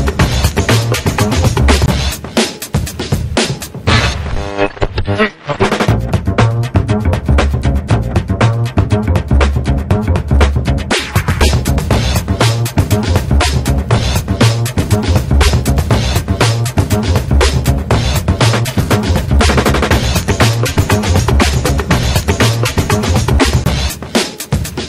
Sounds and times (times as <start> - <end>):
Music: 0.0 - 24.8.